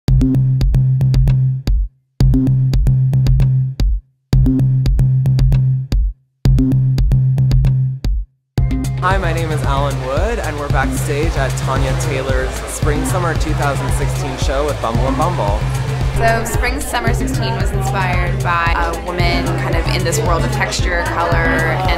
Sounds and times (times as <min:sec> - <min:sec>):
Drum machine: 0:00.1 - 0:21.9
Speech: 0:09.0 - 0:15.6, 0:16.2 - 0:21.9.